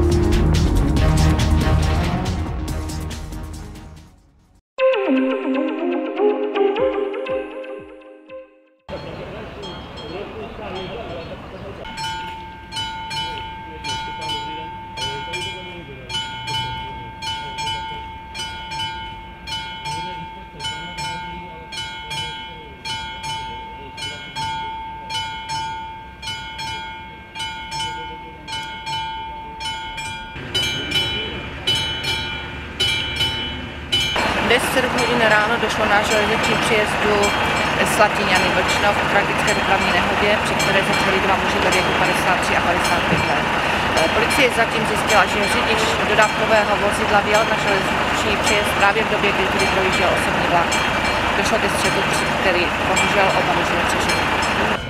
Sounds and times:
Speech: 0:08.9 - 0:12.0, 0:13.1 - 0:16.2, 0:16.8 - 0:18.2, 0:19.9 - 0:25.3, 0:26.6 - 0:29.8, 0:30.6 - 0:32.2, 0:34.2 - 0:50.8, 0:51.4 - 0:54.8
Vehicle: 0:08.9 - 0:54.9.

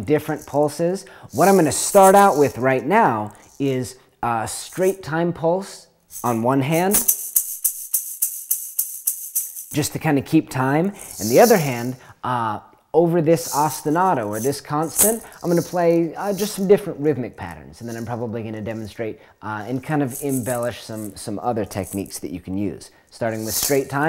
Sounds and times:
Speech: 0:00.0 - 0:07.1, 0:09.7 - 0:24.0.

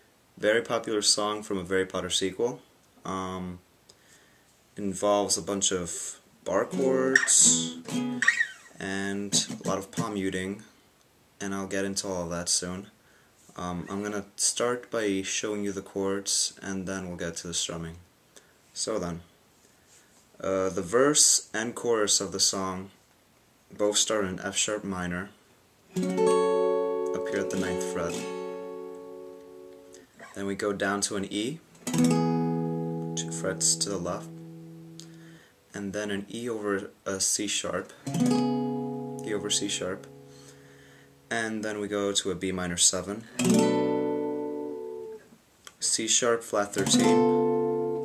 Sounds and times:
Speech: 0:00.4 - 0:03.7, 0:04.8 - 0:07.8, 0:08.8 - 0:10.7, 0:11.4 - 0:13.0, 0:13.6 - 0:18.1, 0:18.8 - 0:19.3, 0:20.4 - 0:23.0, 0:23.7 - 0:25.4, 0:27.1 - 0:28.2, 0:30.2 - 0:31.6, 0:33.2 - 0:34.3, 0:35.7 - 0:38.0, 0:39.2 - 0:40.1, 0:41.3 - 0:43.3, 0:45.8 - 0:47.0
Acoustic guitar: 0:05.0 - 0:10.4, 0:25.9 - 0:36.9, 0:37.6 - 0:42.4, 0:43.2 - 0:45.3, 0:46.6 - 0:48.0
Strum: 0:06.5 - 0:10.2, 0:31.8 - 0:35.5, 0:46.7 - 0:48.0.

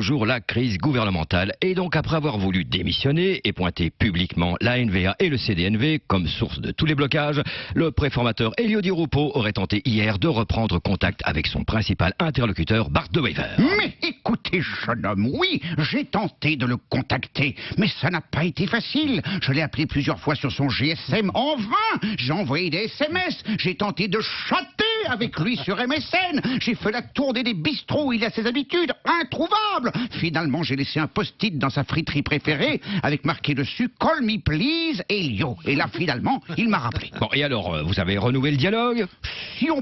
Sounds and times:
Speech: 0:00.0 - 0:39.8.

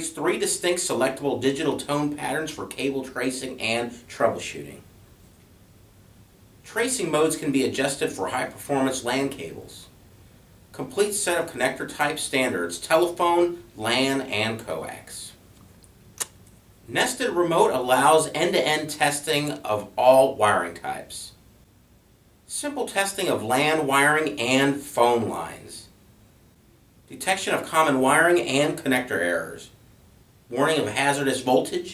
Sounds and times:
Speech: 0:00.0 - 0:04.9, 0:06.7 - 0:10.0, 0:10.7 - 0:15.4, 0:16.9 - 0:21.4, 0:22.5 - 0:26.0, 0:27.1 - 0:29.8, 0:30.5 - 0:31.9.

